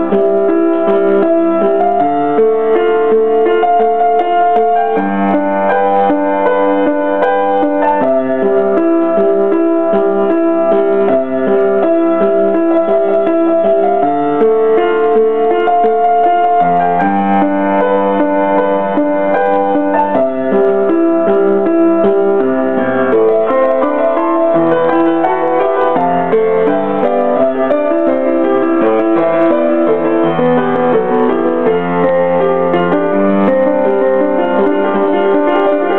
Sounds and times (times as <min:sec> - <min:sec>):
Music: 0:00.0 - 0:35.9.